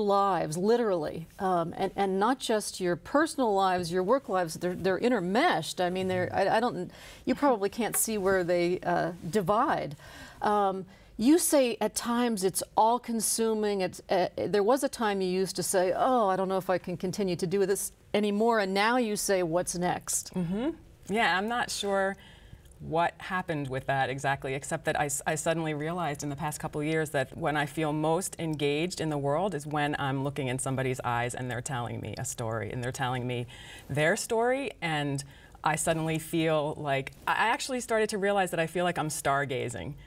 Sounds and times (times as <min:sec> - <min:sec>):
Speech: 0:00.5 - 0:09.9.